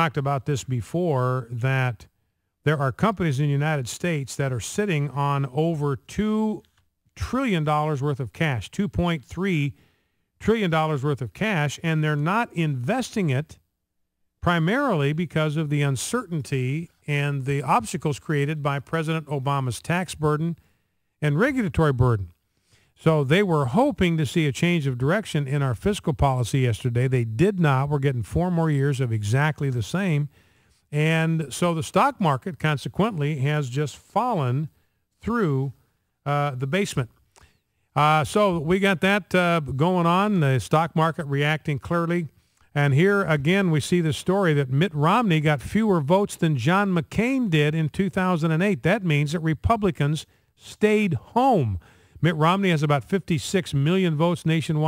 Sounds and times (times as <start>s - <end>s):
Speech: 0.0s - 9.8s, 10.4s - 13.6s, 14.4s - 20.6s, 21.2s - 22.4s, 23.0s - 30.3s, 30.9s - 37.2s, 38.0s - 54.8s.